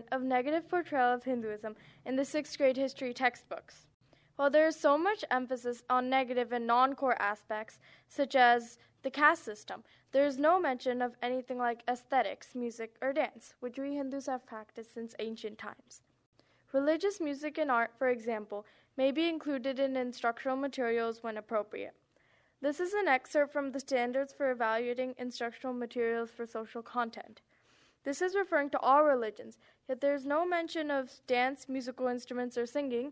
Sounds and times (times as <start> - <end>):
Speech: 0.0 - 16.0, 16.7 - 22.0, 22.6 - 27.4, 28.1 - 33.1.